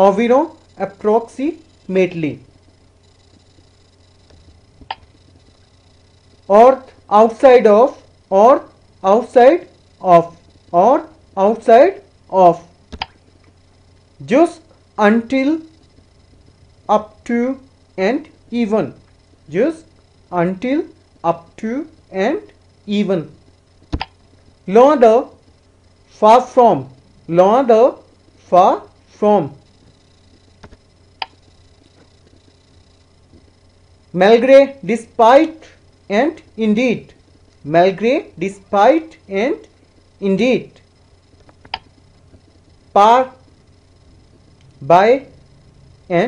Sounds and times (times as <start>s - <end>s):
Speech: 0.0s - 2.5s, 6.5s - 12.7s, 14.2s - 15.7s, 16.9s - 23.4s, 24.7s - 25.4s, 26.2s - 29.6s, 34.2s - 40.8s, 43.0s - 43.4s, 44.8s - 45.3s.